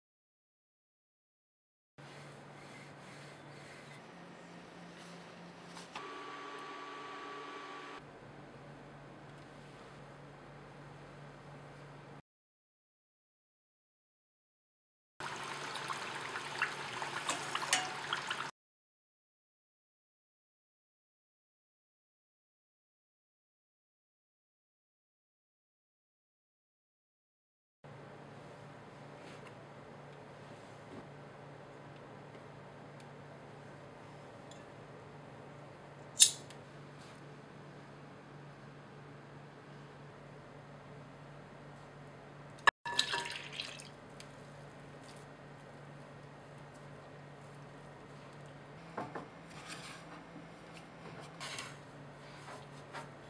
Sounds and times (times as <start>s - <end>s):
Liquid: 15.2s - 18.5s, 42.9s - 44.4s.